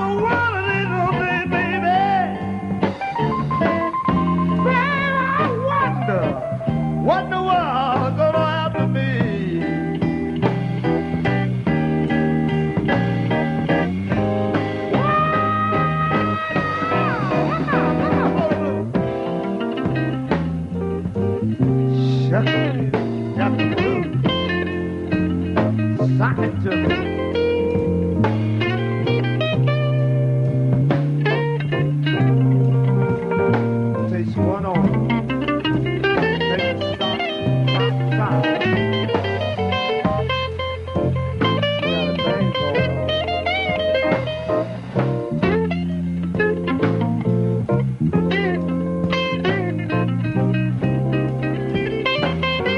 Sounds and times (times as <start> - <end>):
Music: 0.0 - 52.7.